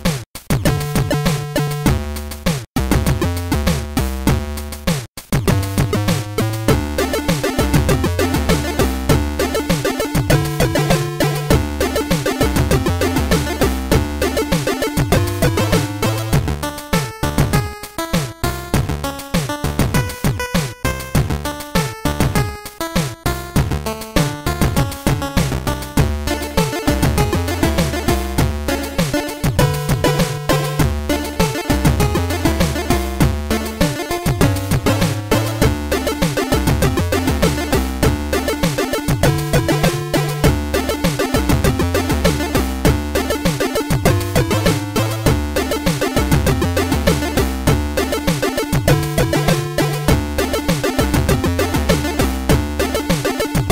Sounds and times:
Video game music: 0.0s - 53.7s.

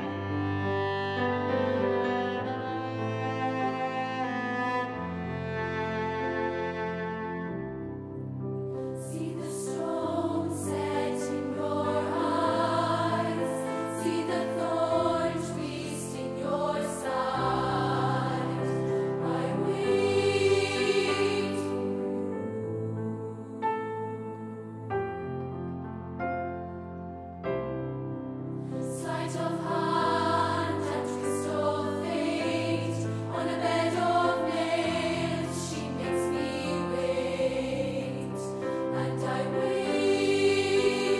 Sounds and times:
Choir: 8.8s - 25.6s, 28.6s - 41.1s.

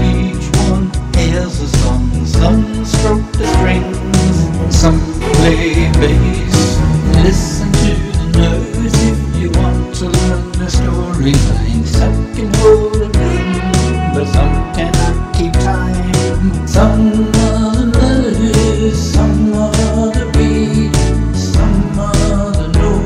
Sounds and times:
Middle Eastern music: 0.0s - 20.0s
Jazz: 0.0s - 23.0s
Rhythm and blues: 0.0s - 23.0s.

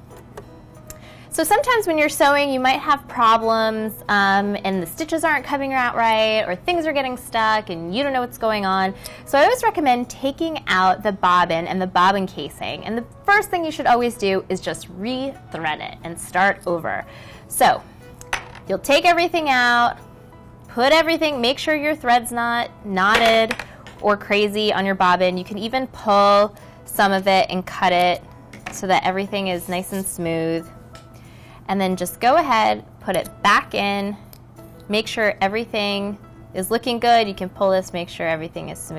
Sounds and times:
Music: 0.0s - 38.9s
Female speech, woman speaking: 1.4s - 17.0s, 17.6s - 17.8s, 18.7s - 20.0s, 20.8s - 30.7s, 31.7s - 34.2s, 34.9s - 38.9s.

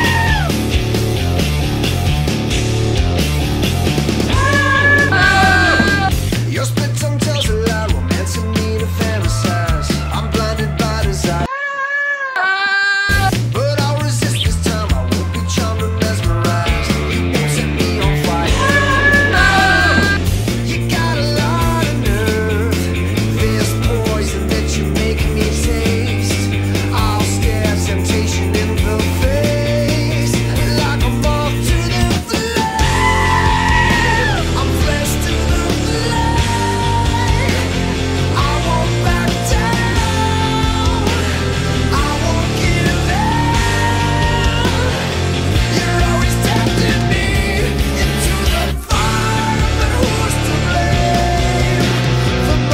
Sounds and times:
Guitar: 0.0s - 11.5s, 13.1s - 52.7s
Rock music: 0.0s - 11.5s, 13.1s - 52.7s
Goat: 4.4s - 6.1s, 11.5s - 13.3s.

